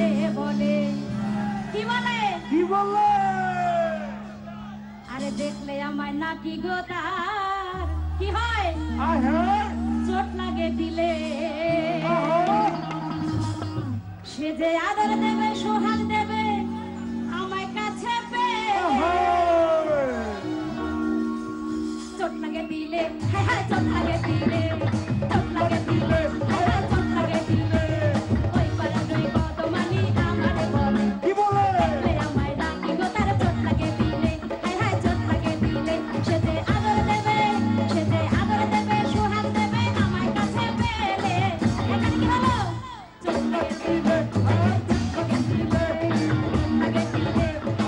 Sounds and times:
Female singing: 0.0s - 1.1s, 5.1s - 9.2s, 10.0s - 12.4s, 13.5s - 19.2s, 22.2s - 47.8s
Music: 0.0s - 47.8s
Male singing: 25.4s - 28.2s, 31.2s - 32.3s.

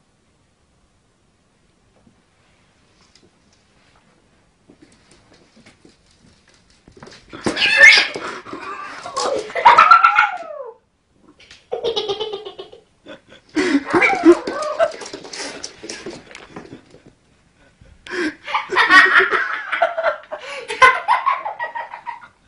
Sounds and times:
Cat: 7.3s - 10.8s, 13.9s - 15.4s.

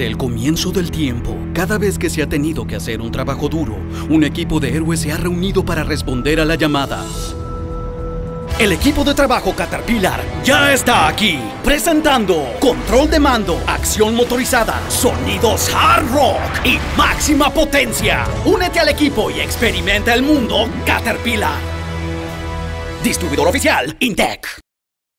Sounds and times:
Speech: 0.0s - 7.4s, 8.6s - 21.6s, 23.0s - 24.6s
Music: 0.0s - 24.6s.

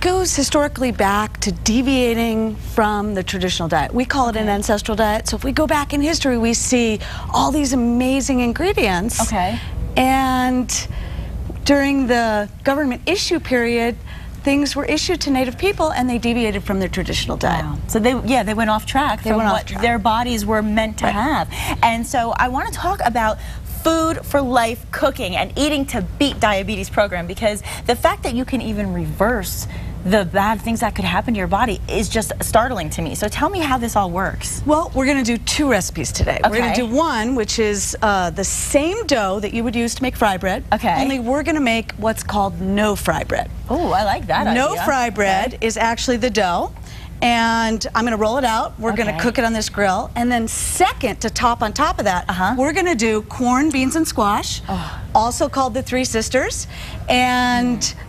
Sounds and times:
Female speech, woman speaking: 0.0s - 10.9s, 11.6s - 54.6s, 55.2s - 58.0s.

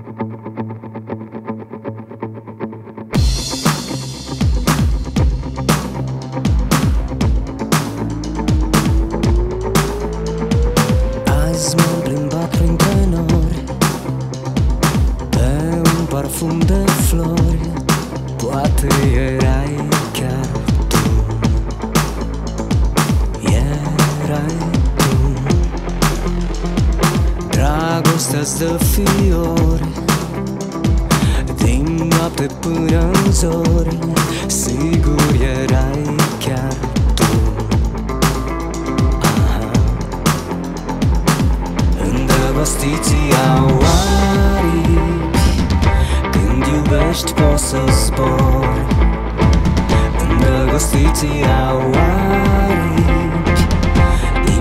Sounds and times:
Soundtrack music: 3.0s - 54.6s.

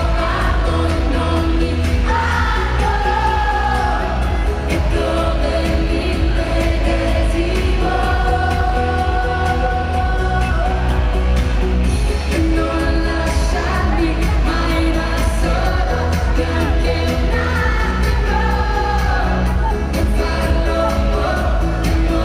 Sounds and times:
Music: 0.0s - 22.2s
Speech: 12.4s - 17.4s.

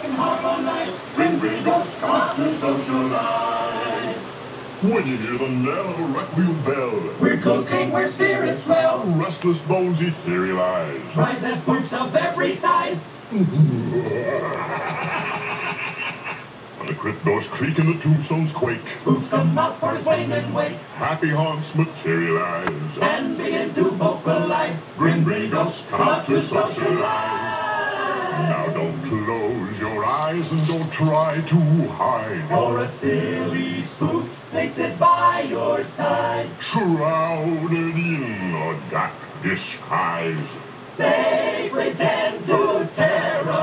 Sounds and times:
Male singing: 0.0s - 6.2s, 6.9s - 13.1s, 18.4s - 27.7s, 28.4s - 38.6s, 41.8s - 43.6s.

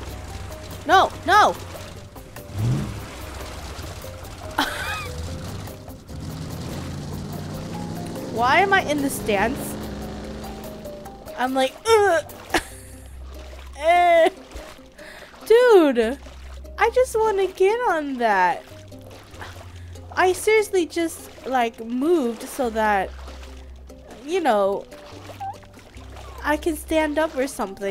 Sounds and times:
Speech: 0.9s - 1.6s, 8.4s - 9.8s, 11.4s - 12.2s, 15.5s - 16.2s, 16.8s - 18.6s, 20.2s - 23.1s, 24.1s - 24.8s, 26.4s - 27.9s.

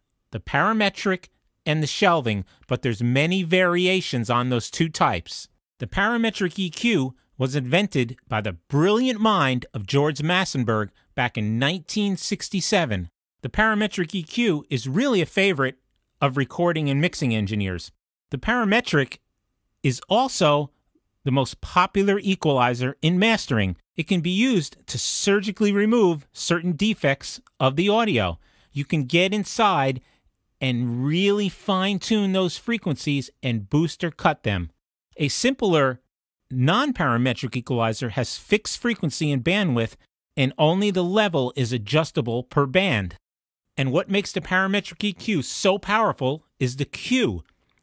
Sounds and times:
Speech: 0.4s - 19.2s, 19.9s - 30.0s, 30.6s - 43.2s, 43.8s - 47.5s.

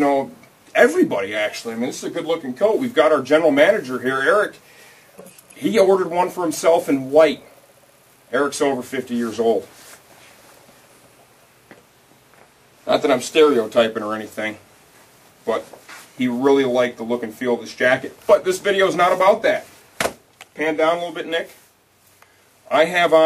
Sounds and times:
Speech: 0.0s - 4.6s, 5.2s - 7.5s, 8.3s - 9.7s, 12.8s - 14.6s, 15.4s - 19.7s, 20.6s - 21.6s, 22.7s - 23.2s.

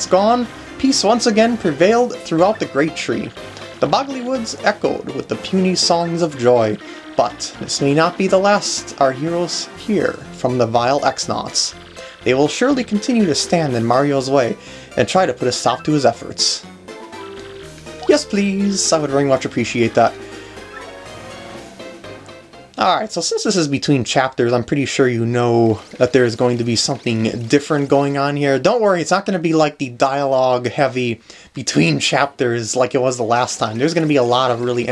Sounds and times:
Speech: 0.0s - 16.7s, 18.0s - 20.2s, 22.8s - 34.9s
Music: 0.0s - 34.9s.

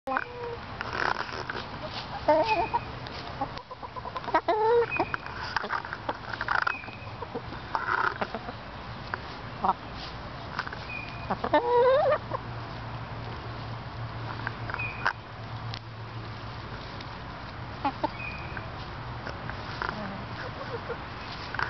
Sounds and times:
Cluck: 0.1s - 8.6s, 9.6s - 9.8s, 11.3s - 12.4s, 17.8s - 18.2s, 19.8s - 21.0s.

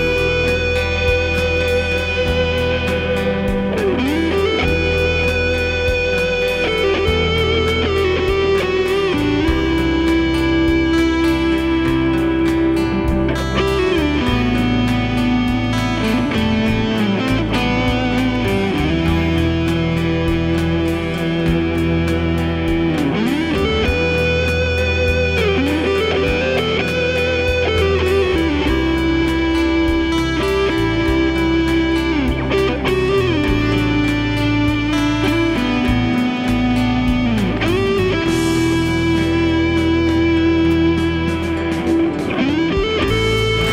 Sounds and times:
Electric guitar: 0.0s - 43.7s
Strum: 0.0s - 43.7s.

